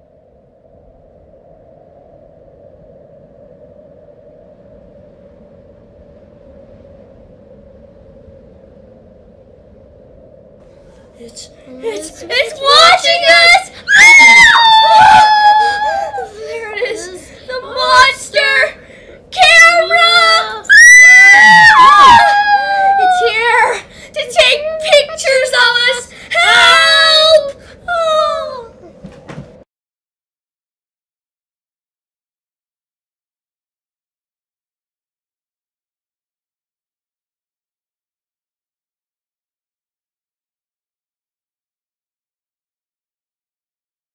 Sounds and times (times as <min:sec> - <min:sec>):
Speech: 0:11.2 - 0:28.8.